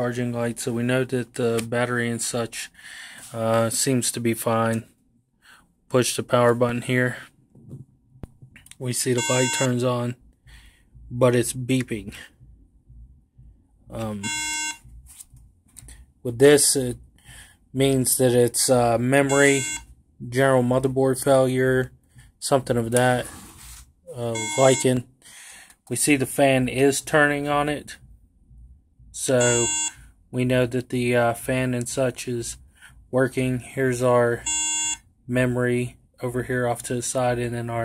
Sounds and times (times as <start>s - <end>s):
Beep, bleep: 9.2s - 9.8s, 19.3s - 19.8s, 24.3s - 24.9s, 29.4s - 30.0s, 34.5s - 35.0s.